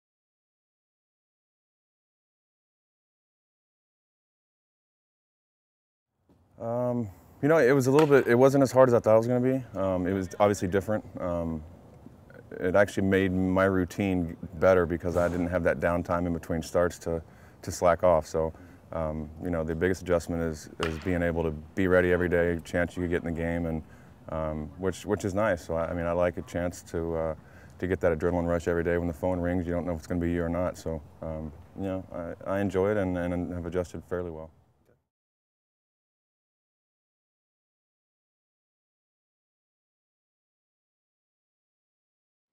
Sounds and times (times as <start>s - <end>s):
Speech: 6.6s - 11.7s, 12.3s - 34.5s.